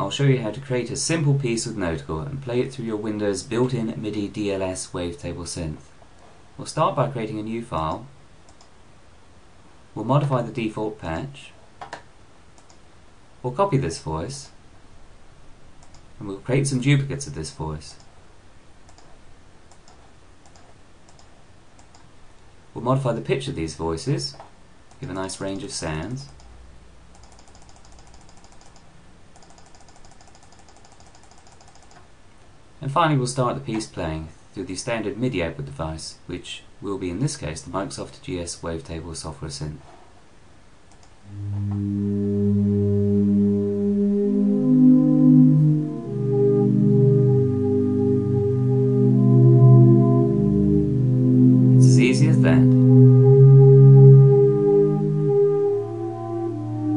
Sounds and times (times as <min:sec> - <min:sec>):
Speech: 0:00.0 - 0:05.9, 0:06.6 - 0:08.1, 0:10.0 - 0:11.6, 0:13.4 - 0:14.6, 0:16.2 - 0:18.1, 0:22.8 - 0:24.4, 0:25.0 - 0:26.4, 0:32.8 - 0:39.9, 0:51.8 - 0:52.8.